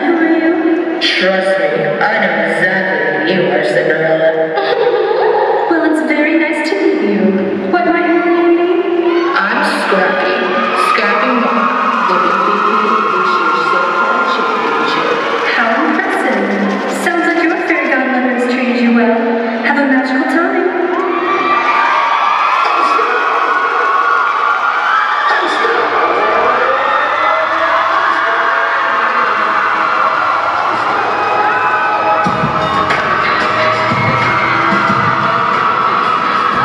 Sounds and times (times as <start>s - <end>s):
Speech: 0.0s - 21.0s, 22.6s - 23.8s, 25.3s - 26.7s
Whoop: 20.9s - 36.6s
Music: 30.2s - 36.6s.